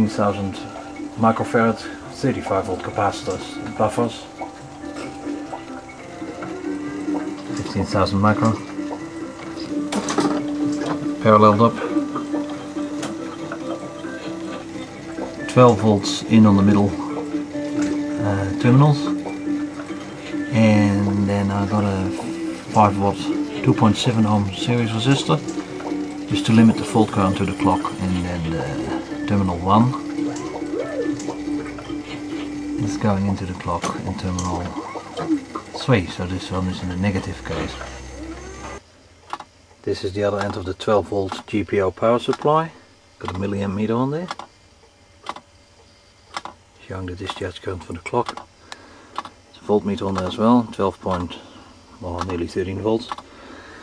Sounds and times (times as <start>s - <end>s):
Speech: 0.0s - 4.3s, 7.5s - 8.6s, 11.2s - 12.0s, 15.5s - 17.0s, 18.2s - 19.2s, 20.5s - 25.4s, 26.3s - 30.0s, 32.8s - 34.8s, 35.8s - 37.9s, 39.8s - 44.4s, 46.8s - 48.3s, 49.5s - 51.4s, 52.0s - 53.2s
Music: 0.0s - 38.8s.